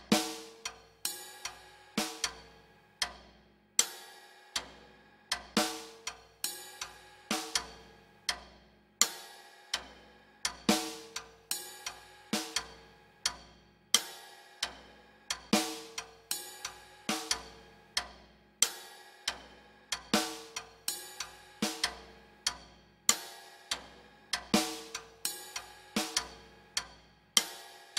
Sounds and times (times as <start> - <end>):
Music: 0.0 - 27.9.